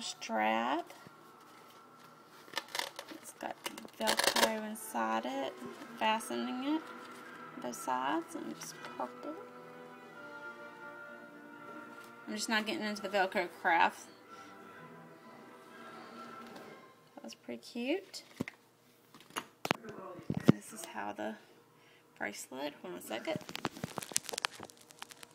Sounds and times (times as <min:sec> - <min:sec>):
Music: 0:00.0 - 0:17.4.